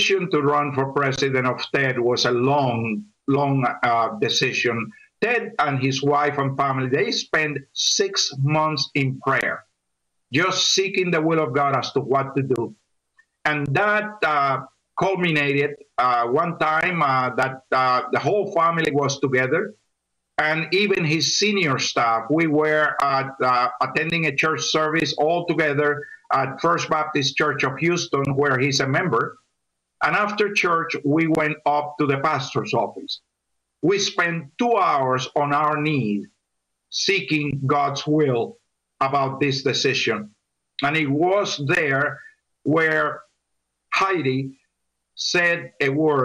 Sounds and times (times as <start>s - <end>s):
Speech: 0.0s - 9.7s, 10.3s - 12.8s, 13.4s - 19.8s, 20.4s - 29.4s, 30.0s - 33.2s, 33.8s - 36.3s, 36.9s - 43.2s, 44.0s - 44.6s, 45.2s - 46.2s.